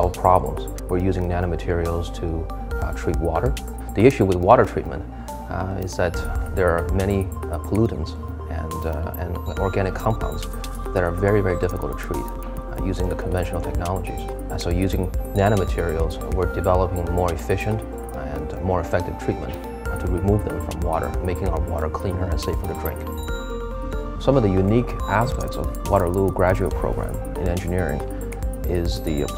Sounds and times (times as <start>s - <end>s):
Speech: 0.0s - 23.0s, 24.2s - 28.0s, 28.7s - 29.3s
Music: 0.0s - 29.3s.